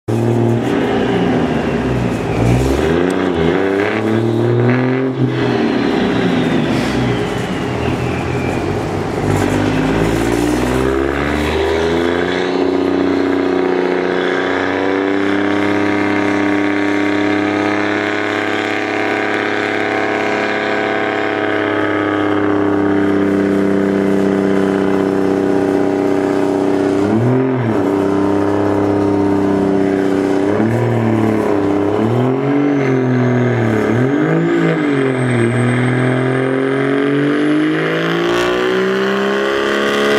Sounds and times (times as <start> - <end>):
Truck: 0.1 - 40.1.